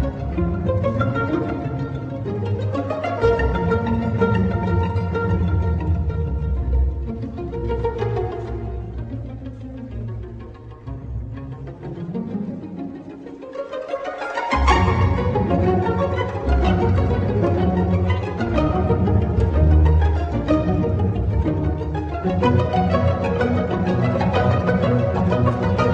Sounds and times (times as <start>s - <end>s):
Violin, fiddle: 0.0s - 25.9s.